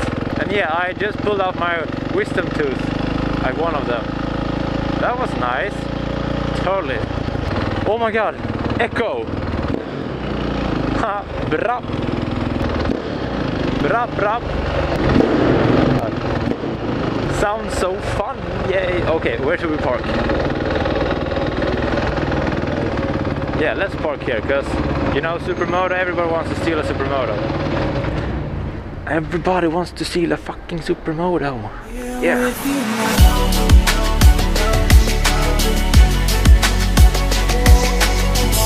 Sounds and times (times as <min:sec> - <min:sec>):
Motorcycle: 0:00.0 - 0:38.6
Outside, urban or manmade: 0:00.0 - 0:38.6
Speech: 0:00.4 - 0:04.0, 0:05.0 - 0:05.8, 0:06.6 - 0:07.1, 0:07.8 - 0:09.3, 0:11.0 - 0:11.9, 0:13.8 - 0:14.4, 0:17.3 - 0:20.1, 0:23.6 - 0:27.4, 0:29.1 - 0:32.6.